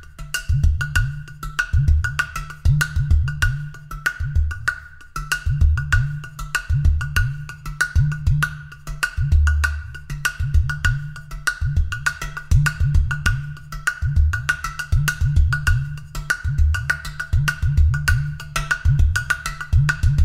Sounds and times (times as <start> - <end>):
Percussion: 0.0 - 20.2.